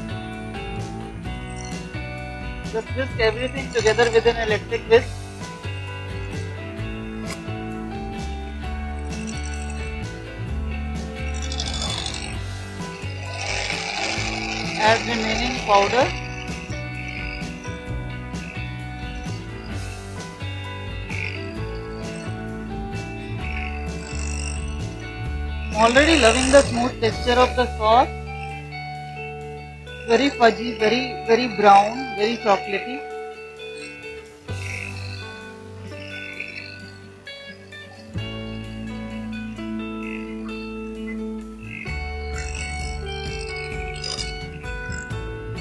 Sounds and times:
Music: 0:00.0 - 0:45.6
Speech: 0:02.8 - 0:05.1, 0:14.8 - 0:16.1, 0:25.8 - 0:28.1, 0:30.1 - 0:33.0.

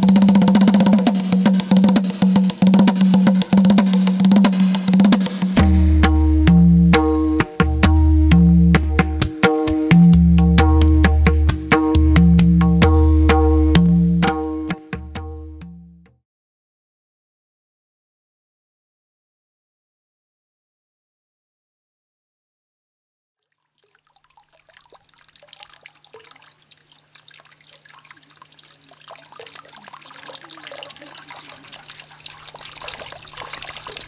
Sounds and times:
Drip: 0:23.6 - 0:34.0.

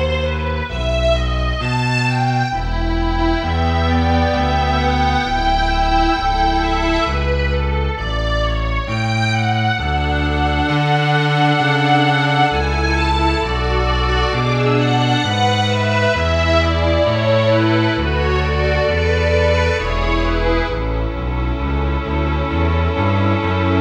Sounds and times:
Sad music: 0:00.0 - 0:23.8
Tender music: 0:00.0 - 0:23.8.

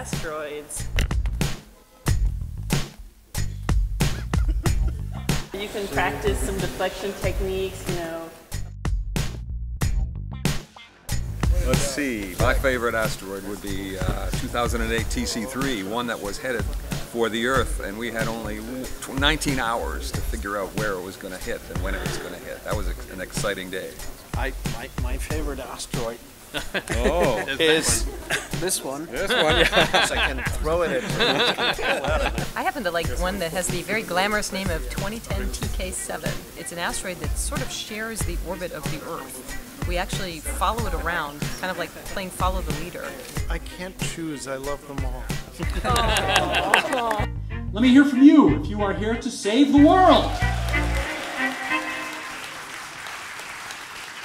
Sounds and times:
Music: 0:00.0 - 0:54.2
Speech: 0:11.5 - 0:26.2, 0:26.9 - 0:46.3, 0:47.8 - 0:50.4.

